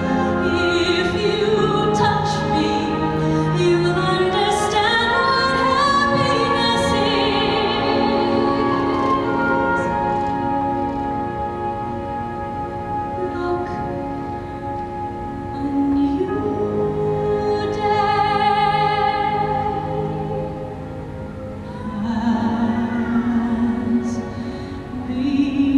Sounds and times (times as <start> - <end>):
Opera: 0.0 - 25.7.